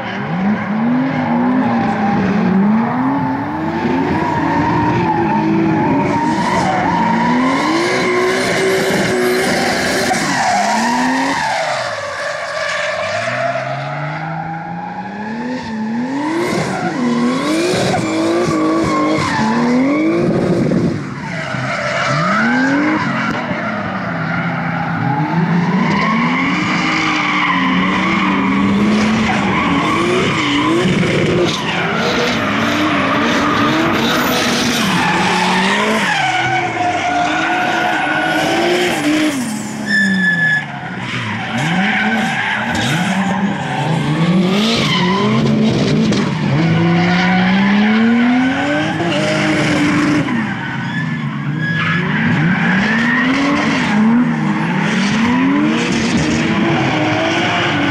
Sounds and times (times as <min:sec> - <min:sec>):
Race car, auto racing: 0:00.0 - 0:57.9
Tire squeal: 0:00.0 - 0:57.9.